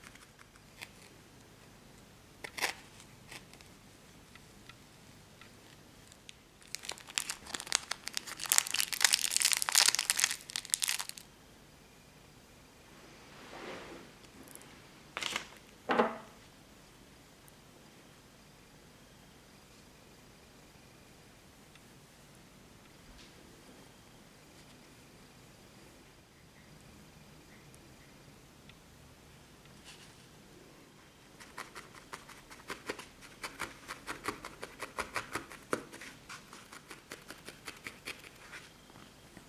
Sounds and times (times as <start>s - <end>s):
Inside, small room: 0.0s - 39.4s.